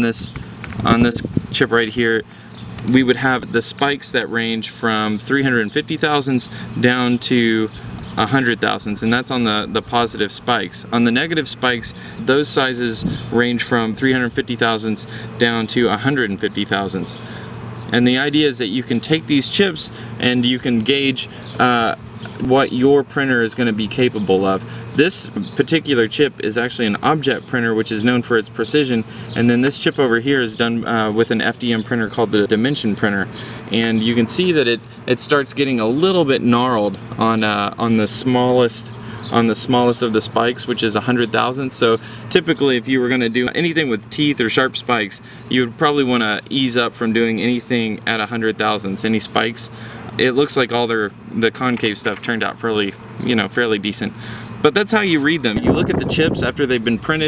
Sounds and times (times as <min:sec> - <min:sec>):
Speech: 0:00.0 - 0:17.3, 0:17.9 - 0:57.2.